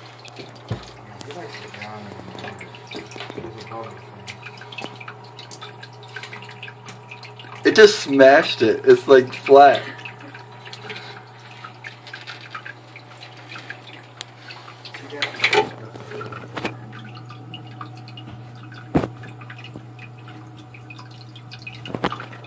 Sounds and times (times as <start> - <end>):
Speech: 7.7 - 9.9, 15.0 - 16.0.